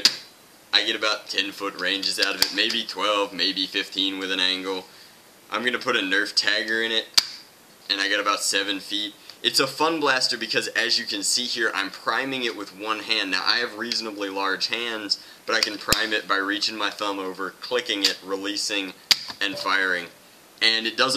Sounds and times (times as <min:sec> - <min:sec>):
Speech: 0:00.0 - 0:00.2, 0:00.8 - 0:07.2, 0:07.9 - 0:21.1.